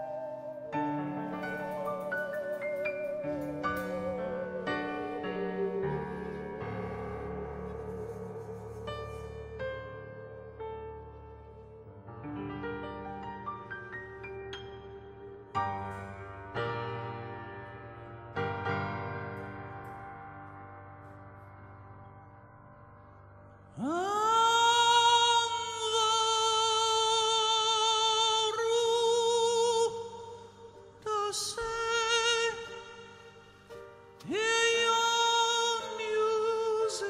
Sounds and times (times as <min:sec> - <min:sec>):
Musical instrument: 0:00.0 - 0:09.7.